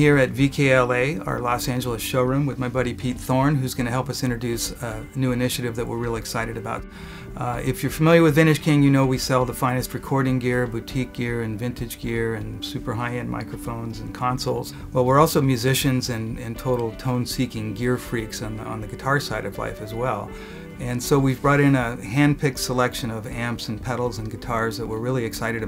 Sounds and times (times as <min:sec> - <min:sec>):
Music: 0:00.0 - 0:25.6
Speech: 0:00.0 - 0:25.6.